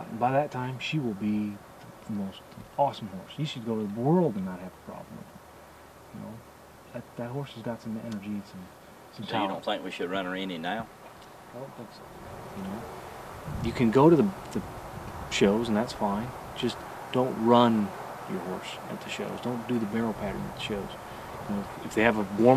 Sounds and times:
Speech: 0:00.0 - 0:05.3, 0:06.1 - 0:10.9, 0:11.6 - 0:12.0, 0:12.6 - 0:12.8, 0:13.6 - 0:14.6, 0:15.3 - 0:22.5.

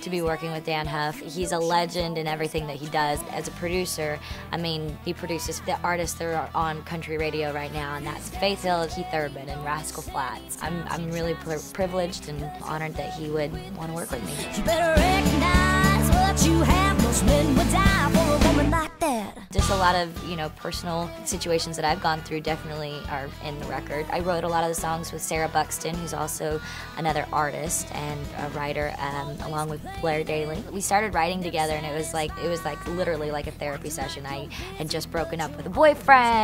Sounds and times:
Speech: 0:00.0 - 0:14.5, 0:19.0 - 0:36.4
Music: 0:00.0 - 0:36.4.

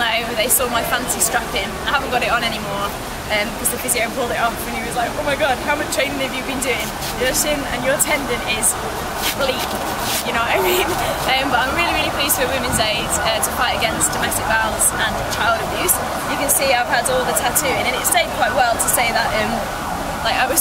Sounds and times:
Speech: 0:00.0 - 0:20.6.

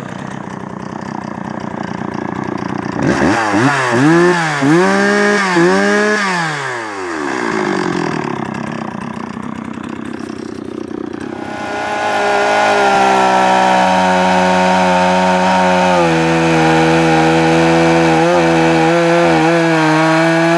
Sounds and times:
Motorcycle: 0:00.0 - 0:20.5.

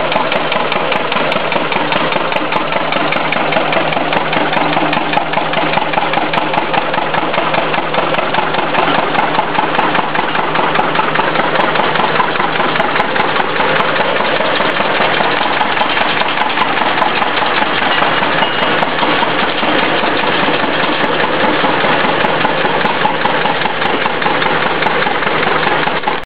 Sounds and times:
Engine: 0:00.0 - 0:26.2.

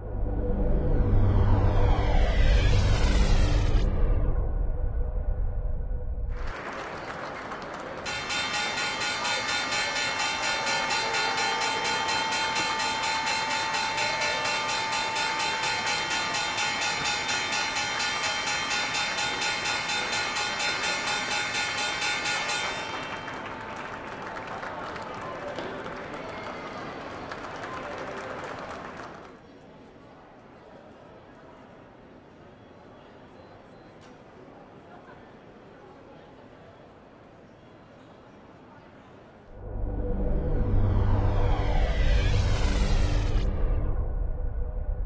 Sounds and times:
Speech: 0:24.4 - 0:28.8, 0:29.4 - 0:39.5.

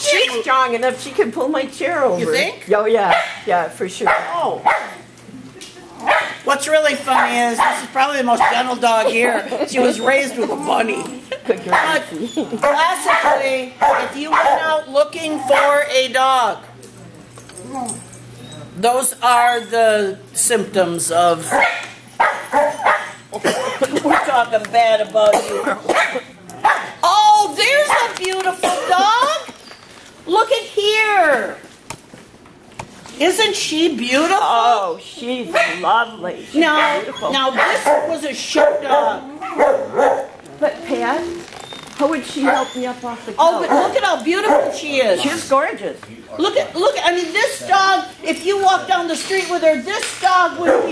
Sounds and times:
Yip: 0:21.6 - 0:23.2, 0:36.8 - 0:40.3.

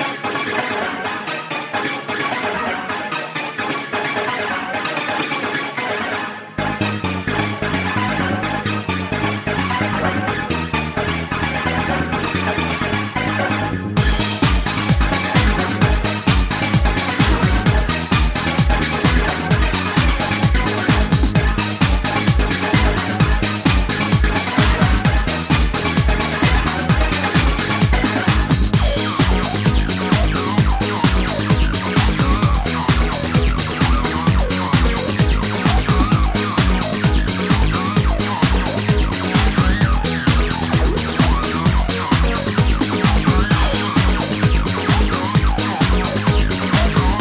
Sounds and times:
Music: 0:00.0 - 0:47.2.

